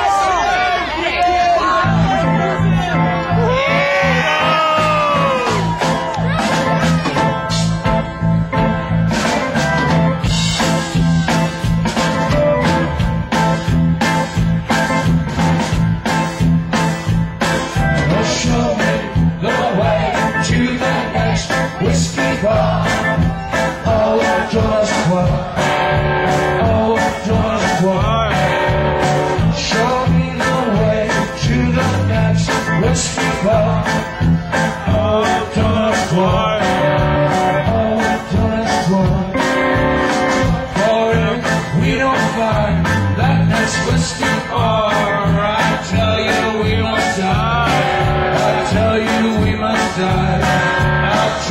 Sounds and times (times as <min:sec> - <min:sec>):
Music: 0:01.6 - 0:51.5.